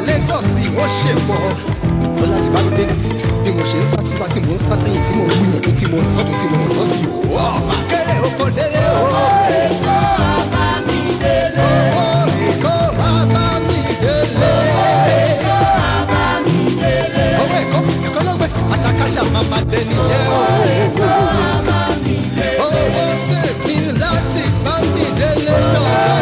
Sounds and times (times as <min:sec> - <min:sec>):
Afrobeat: 0:00.0 - 0:26.2.